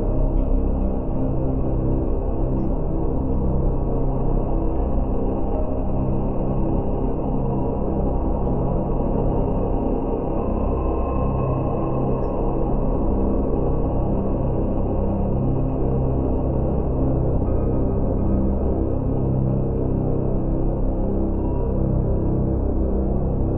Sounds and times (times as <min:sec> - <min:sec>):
Ambient music: 0:00.0 - 0:23.5.